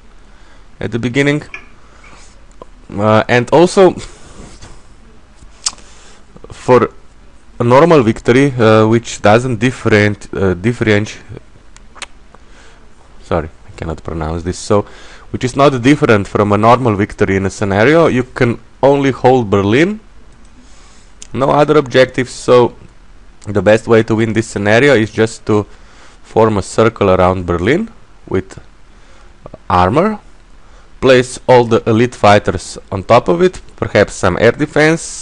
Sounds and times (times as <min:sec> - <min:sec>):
Speech: 0:00.8 - 0:01.6, 0:02.9 - 0:04.1, 0:06.4 - 0:07.0, 0:07.6 - 0:11.5, 0:13.2 - 0:20.1, 0:21.3 - 0:25.7, 0:26.3 - 0:28.7, 0:29.4 - 0:30.3, 0:31.0 - 0:35.2.